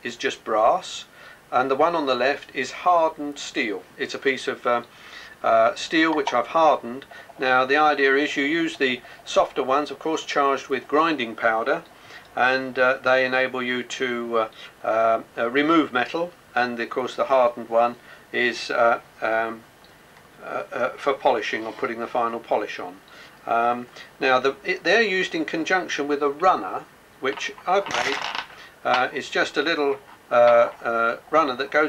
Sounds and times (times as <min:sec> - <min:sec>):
Speech: 0:00.0 - 0:19.6, 0:20.4 - 0:31.8.